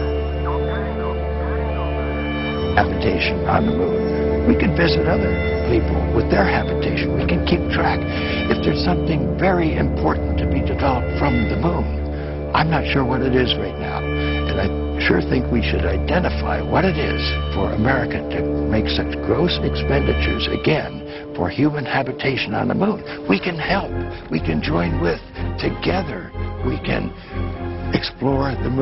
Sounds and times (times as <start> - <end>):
Music: 0.0 - 28.8
Speech: 2.8 - 11.9, 12.5 - 27.2, 28.0 - 28.8.